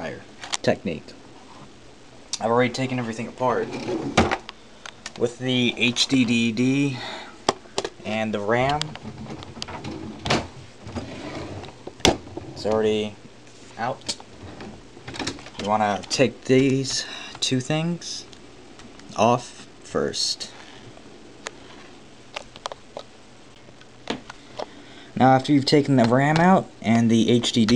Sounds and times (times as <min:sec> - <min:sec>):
Speech: 0:00.0 - 0:01.2, 0:02.4 - 0:03.8, 0:05.2 - 0:07.1, 0:08.0 - 0:09.0, 0:12.6 - 0:13.2, 0:13.8 - 0:14.2, 0:15.6 - 0:18.3, 0:19.1 - 0:20.6, 0:25.2 - 0:27.7.